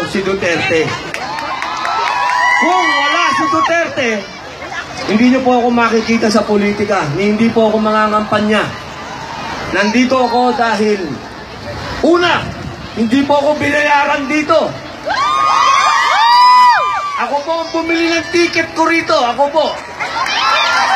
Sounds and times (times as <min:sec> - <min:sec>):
Male speech, man speaking: 0:00.0 - 0:01.0, 0:02.6 - 0:04.3, 0:05.1 - 0:08.8, 0:09.7 - 0:11.2, 0:12.0 - 0:14.8, 0:17.2 - 0:19.8.